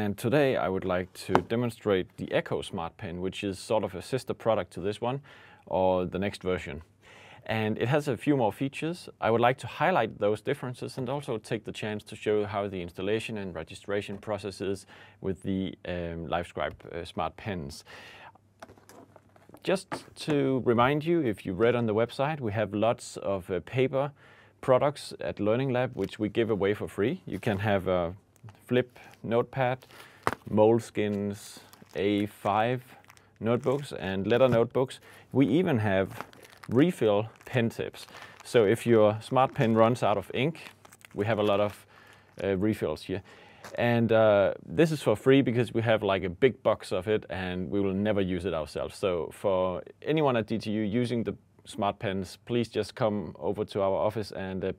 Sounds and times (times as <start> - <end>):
Speech: 0.0 - 17.9, 19.6 - 54.7.